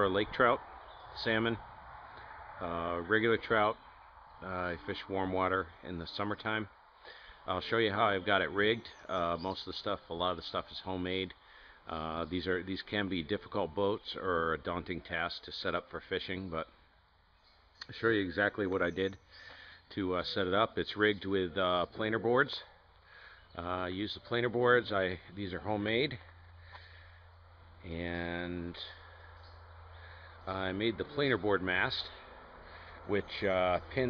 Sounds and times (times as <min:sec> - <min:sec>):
Speech: 0:00.0 - 0:00.6, 0:01.2 - 0:01.6, 0:02.6 - 0:03.8, 0:04.4 - 0:06.8, 0:07.5 - 0:16.8, 0:17.8 - 0:19.2, 0:19.9 - 0:22.7, 0:23.6 - 0:26.3, 0:27.8 - 0:29.0, 0:30.4 - 0:32.2, 0:33.1 - 0:34.1.